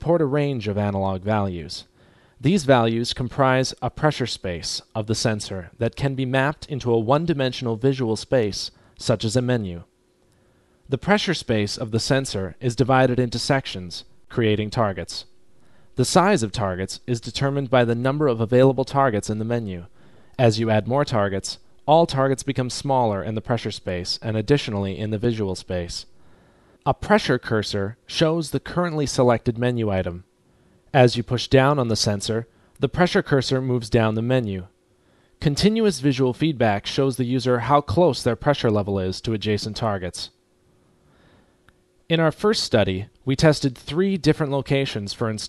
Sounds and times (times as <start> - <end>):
Speech: 0.0 - 9.9, 10.9 - 15.3, 16.0 - 26.1, 26.8 - 30.3, 30.9 - 34.7, 35.4 - 40.4, 42.1 - 45.4.